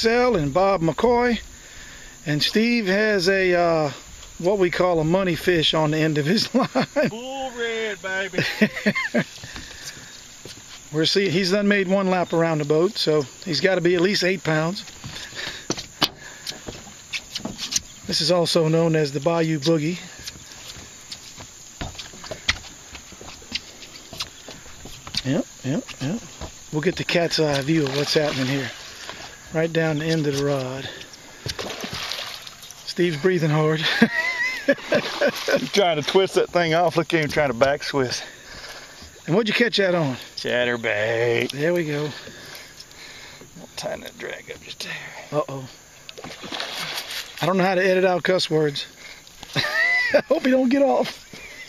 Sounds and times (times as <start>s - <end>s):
Outside, rural or natural: 0.0s - 51.6s
Speech: 7.1s - 8.4s, 47.4s - 48.9s, 50.3s - 51.2s.